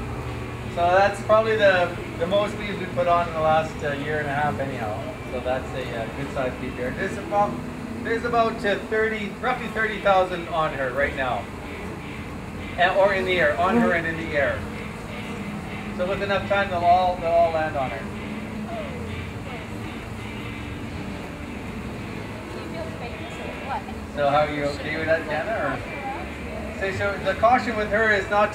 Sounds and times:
Bee, wasp, etc.: 9.3 - 16.8.

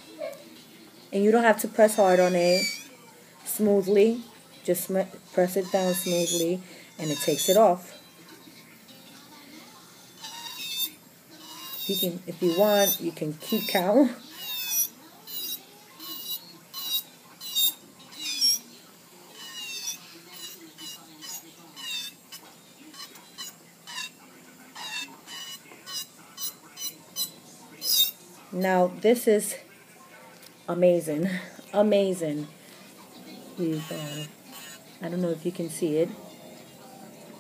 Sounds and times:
Speech: 1.1 - 8.4, 11.9 - 14.3, 22.4 - 37.4.

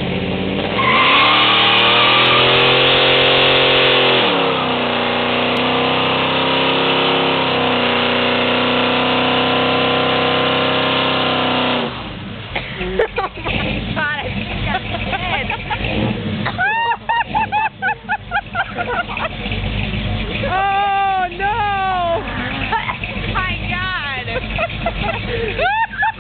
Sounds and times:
Truck: 0.0 - 26.2.

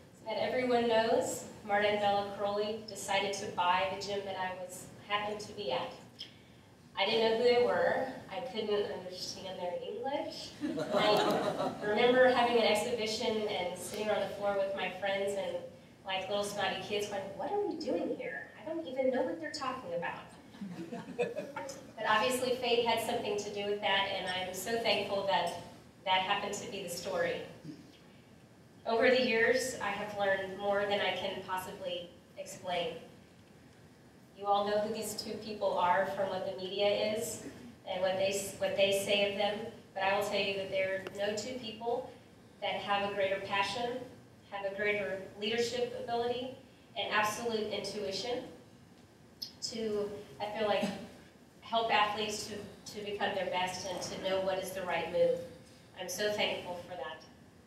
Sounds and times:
Narration, monologue: 0.0 - 57.6
Female speech, woman speaking: 0.3 - 6.0, 7.0 - 20.4, 22.0 - 27.5, 28.9 - 33.0, 34.4 - 48.6, 49.5 - 51.0, 51.6 - 57.2.

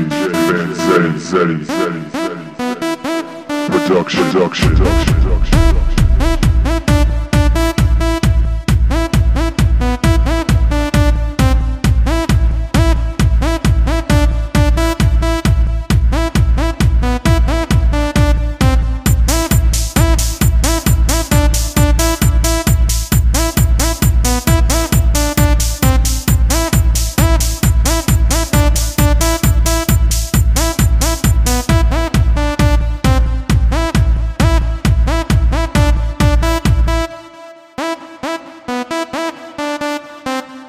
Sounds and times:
Techno: 0.0 - 37.1.

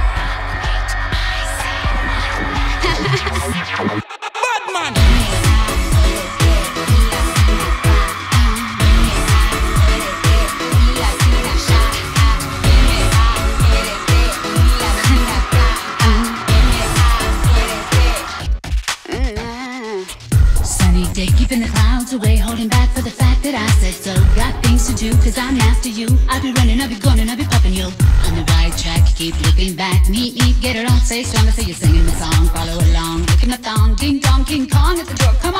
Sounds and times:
Singing: 0.0 - 20.2, 20.8 - 35.5
Music of Asia: 5.0 - 18.6.

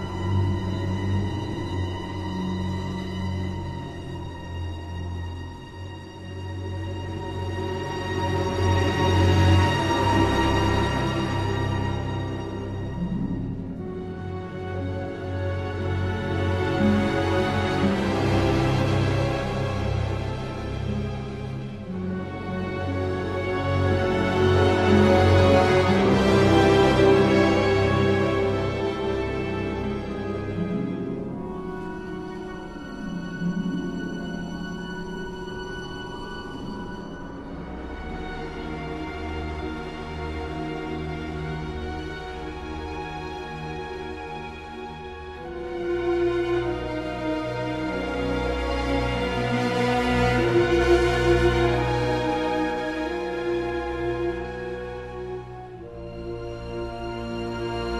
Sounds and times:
Music: 0.0 - 57.9.

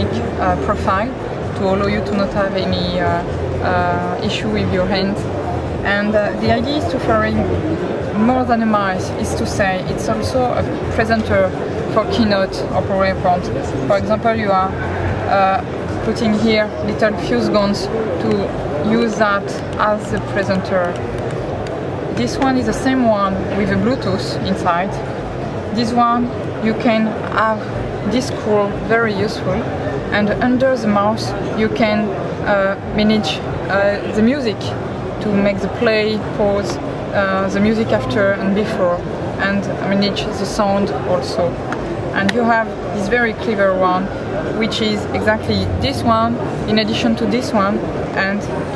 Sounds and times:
Speech: 0.0 - 21.0, 22.2 - 25.0, 25.7 - 48.7.

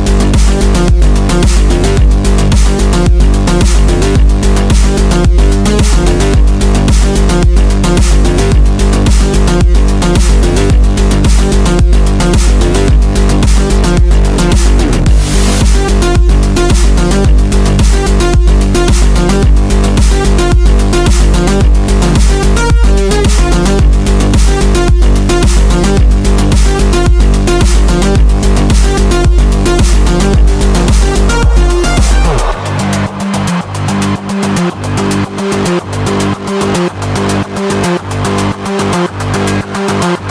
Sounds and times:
Music: 0.0 - 40.3.

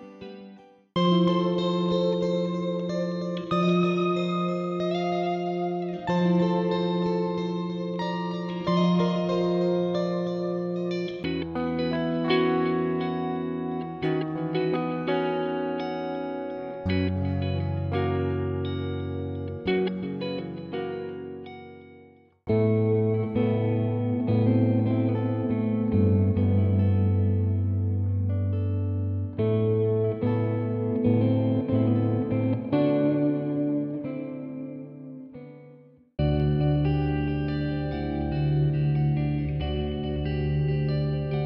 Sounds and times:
Guitar: 0.0 - 41.4.

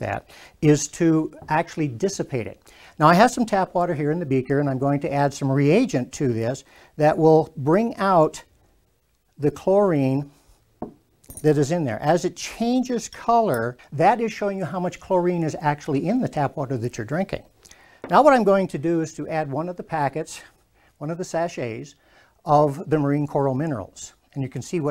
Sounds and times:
Speech: 0.0 - 8.5, 9.4 - 10.4, 11.4 - 17.5, 18.1 - 24.9.

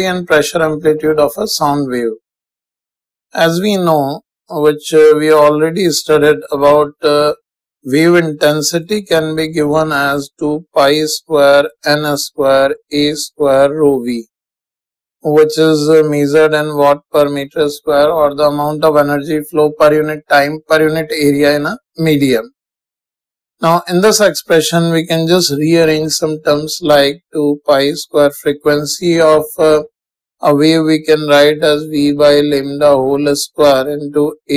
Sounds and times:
Speech: 0.0 - 2.2, 3.4 - 14.3, 15.3 - 22.5, 23.6 - 34.5.

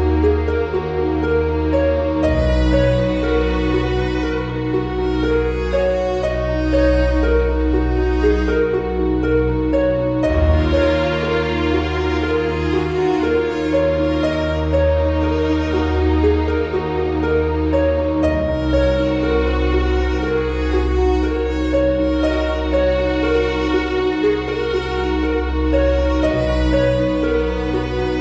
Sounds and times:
Background music: 0.0 - 28.2.

